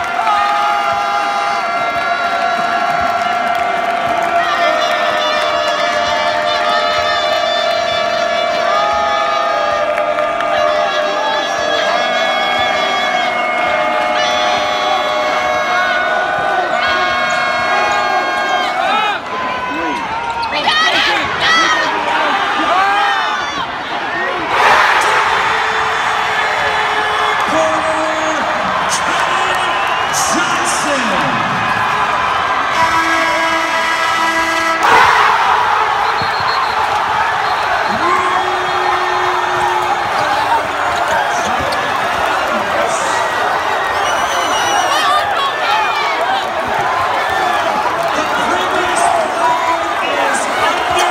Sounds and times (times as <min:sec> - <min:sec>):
Inside, public space: 0:00.0 - 0:51.1.